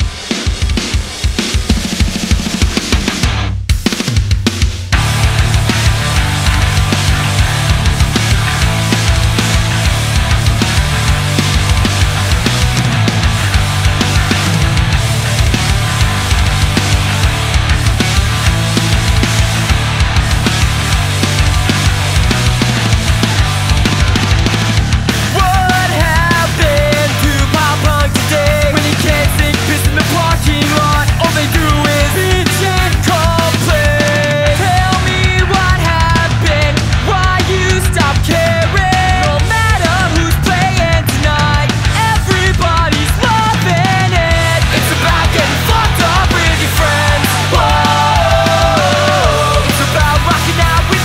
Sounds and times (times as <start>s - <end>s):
Bass guitar: 0.0s - 51.0s
Exciting music: 5.0s - 51.0s
Pop music: 25.3s - 51.0s.